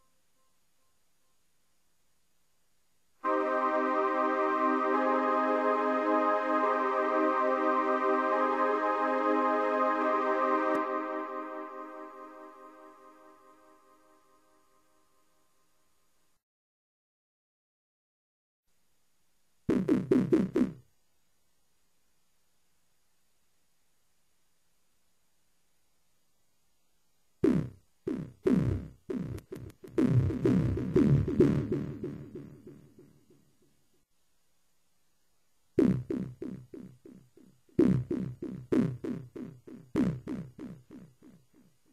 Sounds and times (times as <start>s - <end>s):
Electronic music: 3.3s - 13.8s, 27.5s - 33.3s.